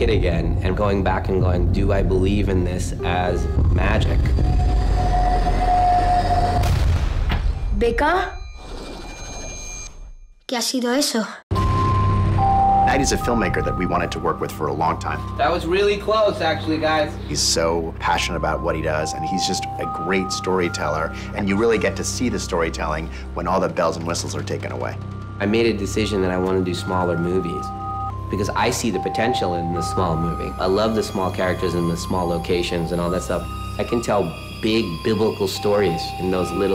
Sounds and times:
Music: 0.0s - 6.9s, 11.5s - 36.7s.

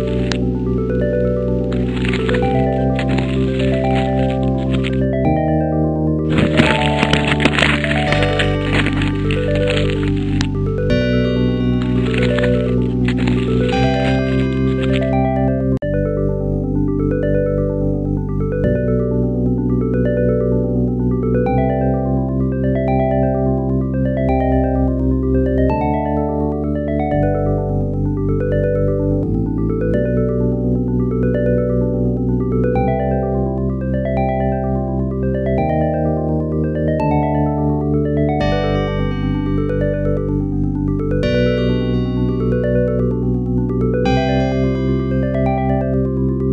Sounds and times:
Music: 0.0s - 46.5s.

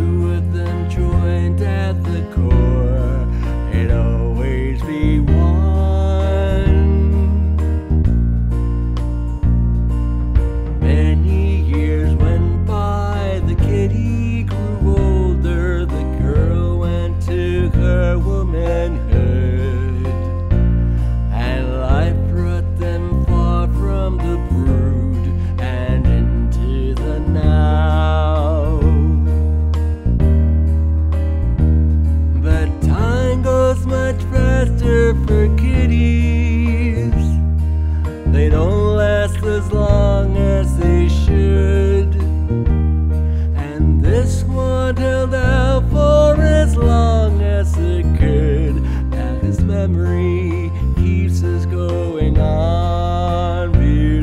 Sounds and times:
Music: 0.0s - 54.2s.

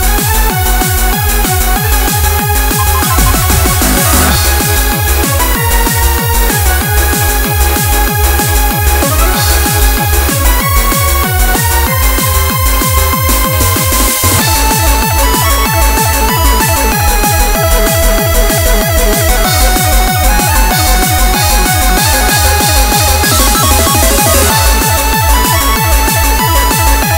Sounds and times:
Music: 0.0s - 27.1s.

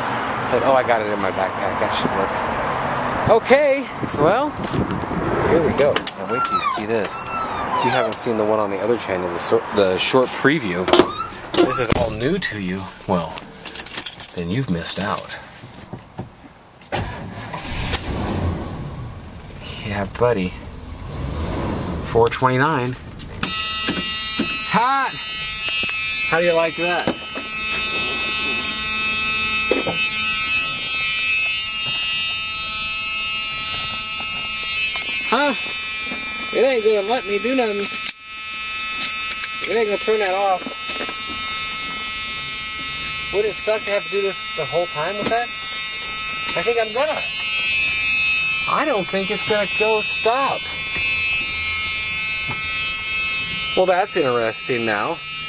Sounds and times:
Outside, urban or manmade: 0.0s - 55.4s
Speech: 0.5s - 2.4s, 3.3s - 4.6s, 5.5s - 7.2s, 7.8s - 11.0s, 11.6s - 13.4s, 14.4s - 15.4s, 19.6s - 20.6s, 22.1s - 23.0s, 26.3s - 27.1s, 35.3s - 35.6s, 36.5s - 37.9s, 39.7s - 40.8s, 43.3s - 45.5s, 46.5s - 47.3s, 48.7s - 50.6s, 53.8s - 55.2s.

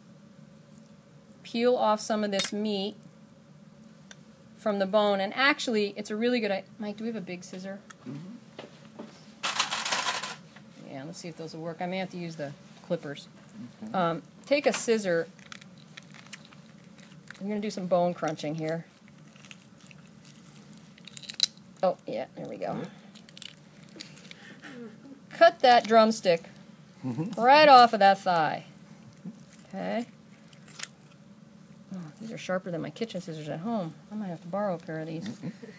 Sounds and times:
Inside, small room: 0.0s - 35.7s.

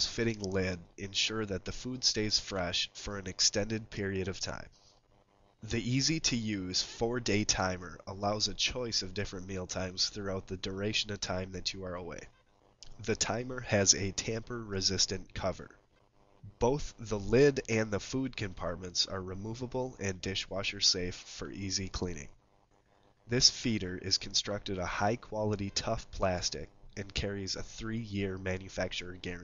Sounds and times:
Speech: 0.0s - 4.7s, 5.6s - 15.8s, 16.5s - 22.3s, 23.3s - 29.4s.

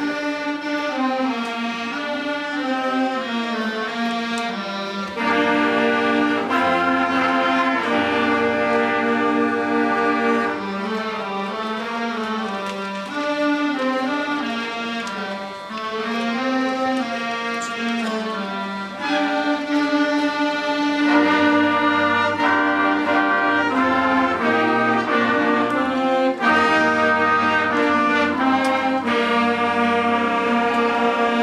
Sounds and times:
Music: 0.0s - 31.4s.

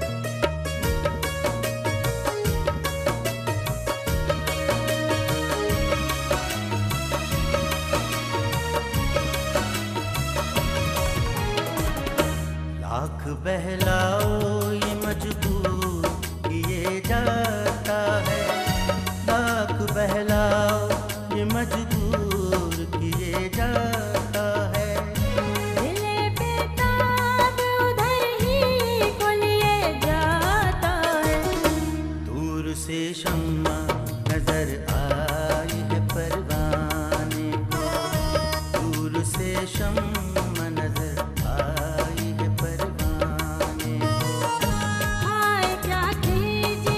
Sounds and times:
Music of Bollywood: 0.0s - 46.9s.

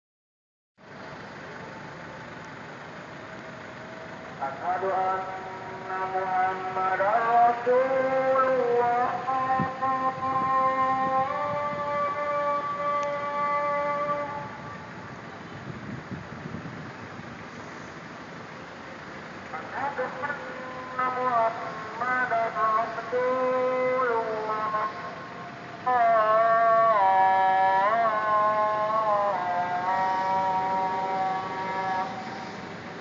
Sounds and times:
Car: 0.8s - 33.0s
Outside, urban or manmade: 0.8s - 33.0s.

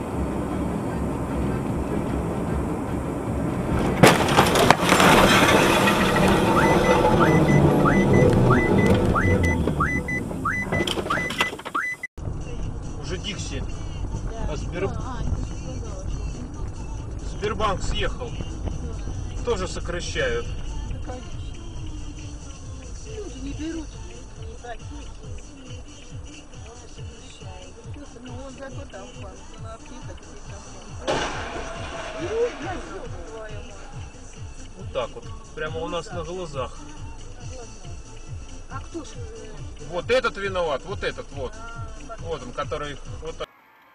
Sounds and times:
Car: 0.0s - 43.9s
Music: 12.2s - 43.9s
Speech: 12.5s - 16.3s, 21.1s - 21.5s, 23.1s - 25.2s, 26.7s - 31.1s, 32.2s - 34.0s, 37.4s - 38.0s, 38.7s - 43.5s.

